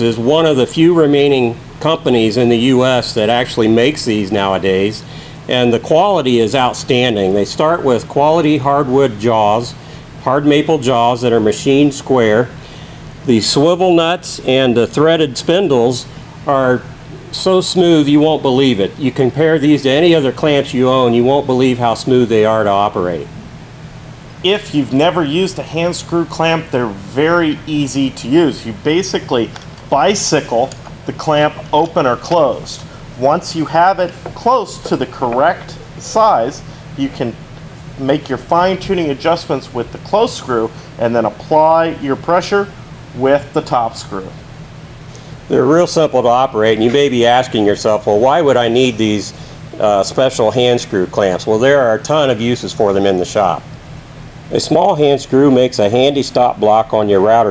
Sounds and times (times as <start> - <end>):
Speech: 0.0 - 12.6, 13.3 - 23.4, 24.4 - 37.4, 38.0 - 44.4, 45.5 - 53.7, 54.5 - 57.5.